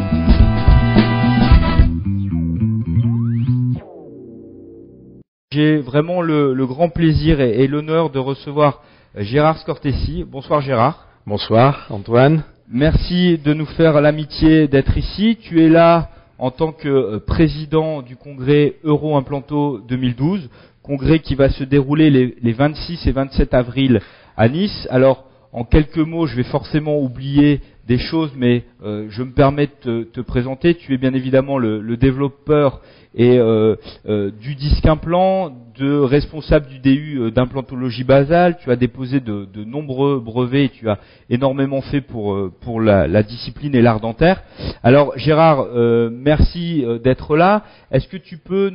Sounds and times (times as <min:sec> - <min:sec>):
Speech: 0:05.5 - 0:48.7.